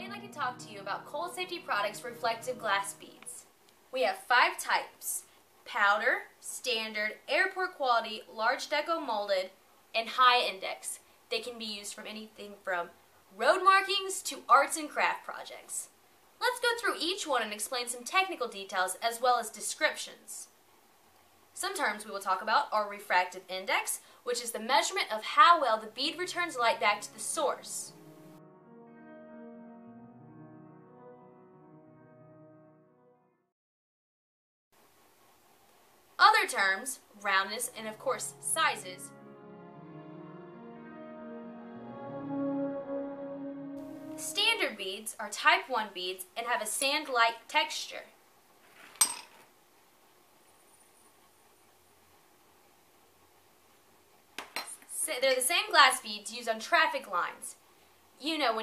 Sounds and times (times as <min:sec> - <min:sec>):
Music: 0:00.0 - 0:03.4, 0:26.2 - 0:33.5, 0:37.8 - 0:44.8
Speech: 0:00.0 - 0:20.6, 0:21.6 - 0:27.9, 0:36.2 - 0:39.1, 0:44.2 - 0:48.2, 0:54.9 - 0:57.6, 0:58.2 - 0:58.6.